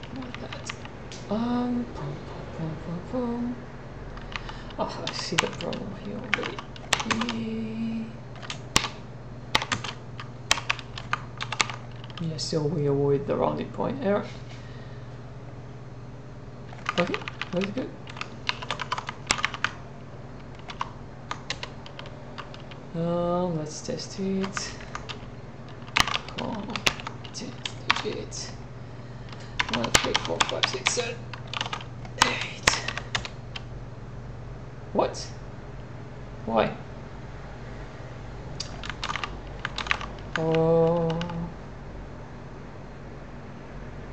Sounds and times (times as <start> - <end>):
Speech: 0.0 - 3.6, 4.8 - 8.2, 12.2 - 14.4, 17.0 - 18.0, 22.9 - 24.8, 26.3 - 28.6, 29.7 - 31.2, 35.0 - 35.4, 36.4 - 36.8, 40.4 - 41.6.